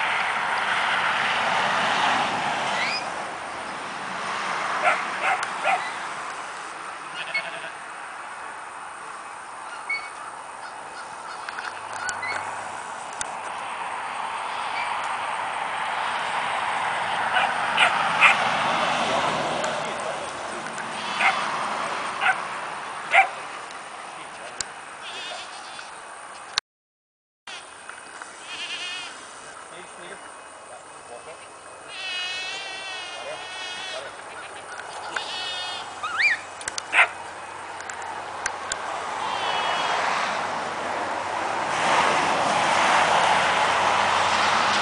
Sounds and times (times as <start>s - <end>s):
Bleat: 7.1s - 7.8s, 14.5s - 14.9s, 21.0s - 21.4s, 25.0s - 25.9s, 28.4s - 29.2s, 31.9s - 34.2s, 35.1s - 36.0s, 39.3s - 39.9s.